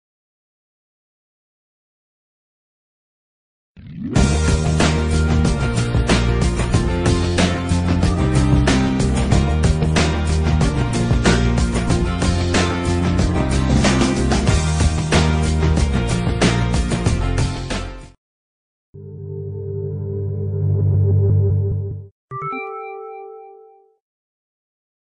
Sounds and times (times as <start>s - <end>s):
Music: 4.2s - 18.2s, 19.0s - 24.0s.